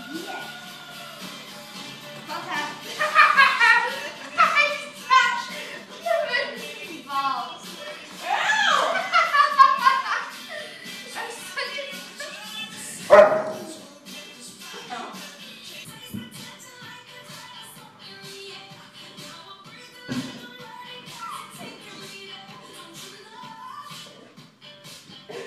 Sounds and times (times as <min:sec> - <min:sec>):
Music: 0:00.0 - 0:25.4
Dog: 0:13.1 - 0:13.8.